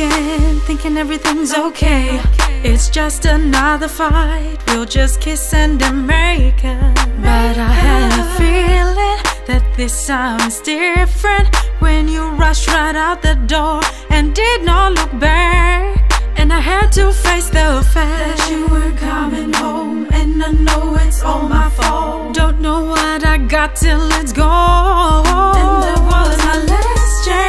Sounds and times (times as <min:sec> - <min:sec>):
Sad music: 0:07.2 - 0:14.6, 0:24.6 - 0:27.4.